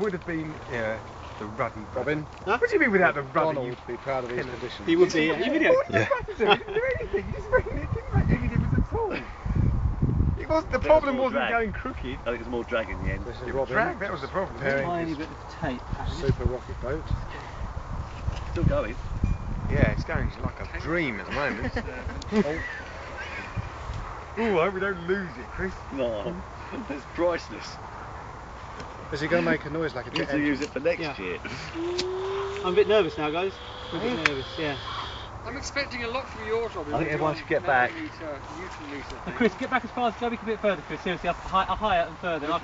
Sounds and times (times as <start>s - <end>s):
Speech: 0.0s - 9.3s, 10.4s - 17.2s, 19.7s - 22.7s, 29.1s - 31.9s, 32.6s - 34.8s, 35.5s - 42.6s.